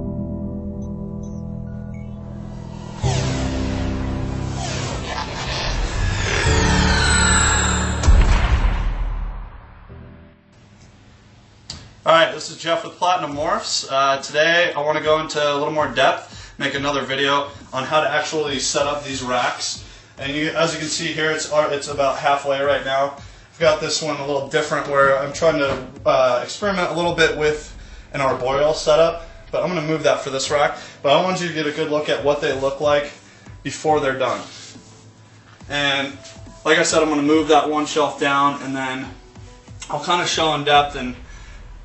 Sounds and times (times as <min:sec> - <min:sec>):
Music: 0:00.0 - 0:41.8
Speech: 0:12.0 - 0:34.6, 0:35.7 - 0:39.2, 0:39.8 - 0:41.2.